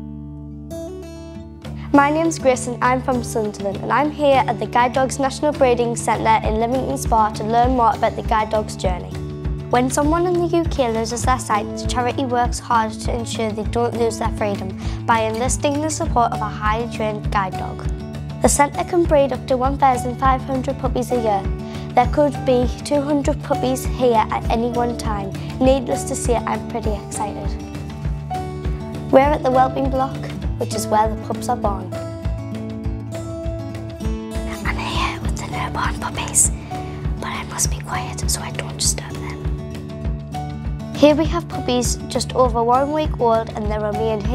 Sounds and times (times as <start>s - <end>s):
Music: 0.0s - 44.3s
Speech: 1.9s - 9.2s, 9.8s - 27.6s, 29.1s - 32.0s, 41.0s - 44.3s.